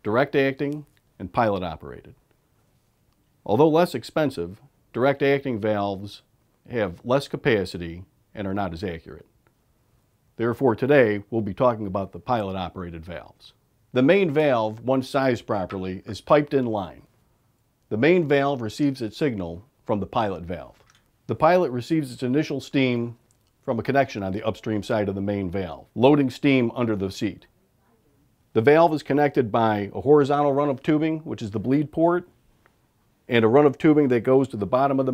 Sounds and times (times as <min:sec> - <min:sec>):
Speech: 0:00.0 - 0:02.2, 0:03.4 - 0:09.3, 0:10.4 - 0:17.1, 0:17.9 - 0:32.3, 0:33.3 - 0:35.1.